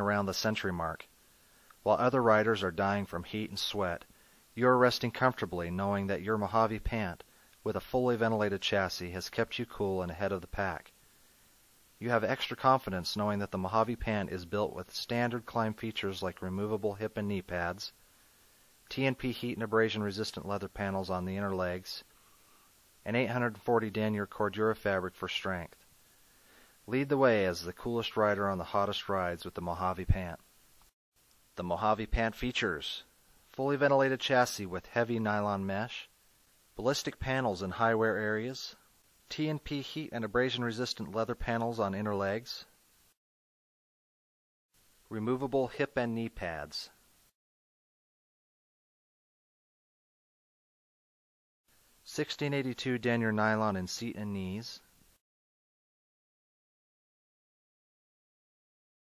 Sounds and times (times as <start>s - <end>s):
Speech: 0.0s - 1.1s, 1.8s - 11.0s, 12.0s - 18.0s, 18.9s - 22.1s, 23.0s - 25.9s, 26.9s - 30.4s, 31.6s - 36.1s, 36.8s - 42.8s, 45.1s - 47.0s, 52.0s - 54.9s.